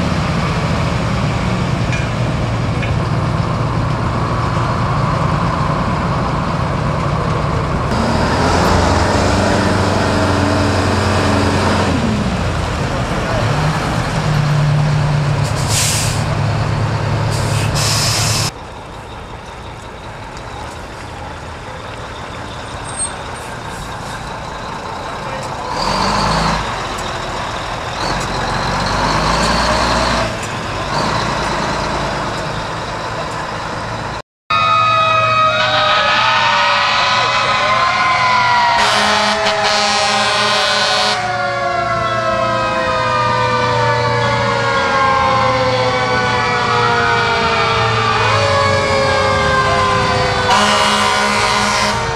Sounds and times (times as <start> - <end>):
Truck: 0.0 - 52.1.